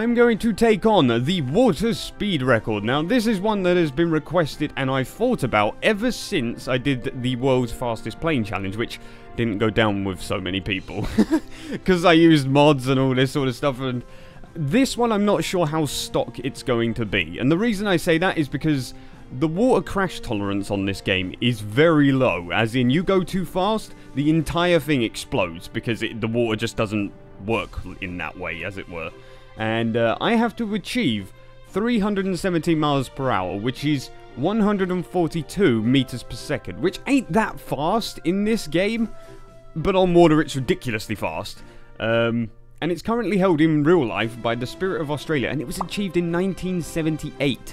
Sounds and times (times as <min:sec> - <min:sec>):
Speech: 0:00.0 - 0:39.2, 0:39.8 - 0:47.7
Music: 0:00.0 - 0:47.7.